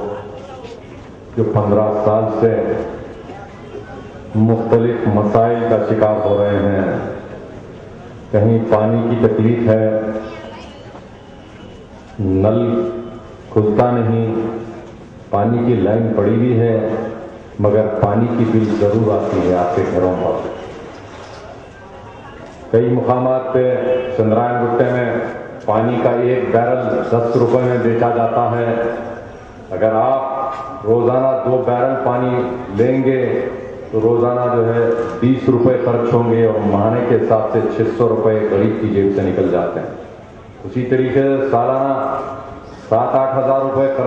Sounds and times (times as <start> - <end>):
Male speech, man speaking: 0.0 - 0.8, 1.4 - 3.0, 4.3 - 7.2, 8.3 - 10.3, 12.2 - 20.6, 22.7 - 40.0, 40.6 - 44.0
Narration, monologue: 0.0 - 11.1, 11.8 - 21.7, 22.6 - 44.0.